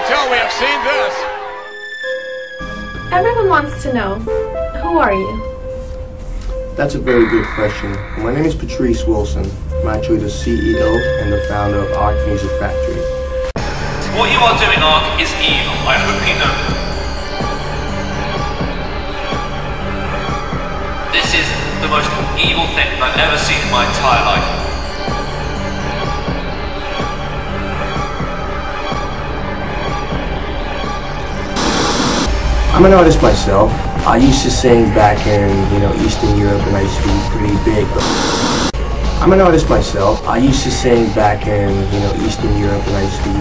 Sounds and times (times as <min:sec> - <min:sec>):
Theme music: 0:00.0 - 0:43.4
Speech: 0:06.8 - 0:13.0, 0:14.0 - 0:16.8, 0:21.2 - 0:24.6, 0:32.7 - 0:38.0, 0:39.2 - 0:43.4.